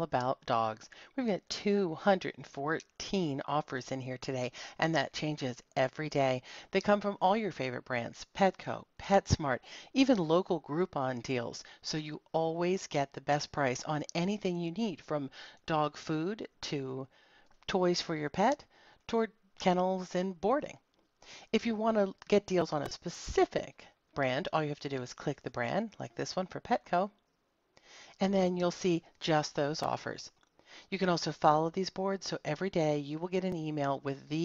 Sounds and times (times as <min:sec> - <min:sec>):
Speech: 0:00.0 - 0:17.1, 0:17.7 - 0:20.8, 0:21.6 - 0:27.1, 0:28.2 - 0:34.4.